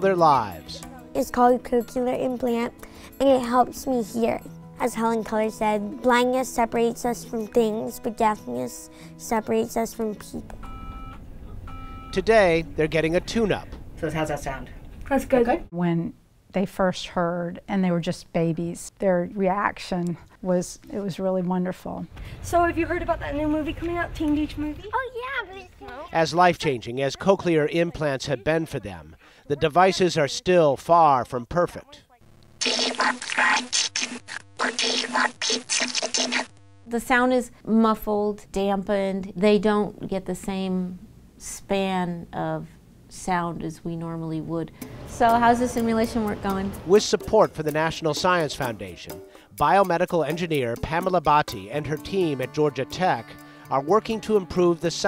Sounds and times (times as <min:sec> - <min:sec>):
Music: 0:00.0 - 0:12.1, 0:44.7 - 0:55.0.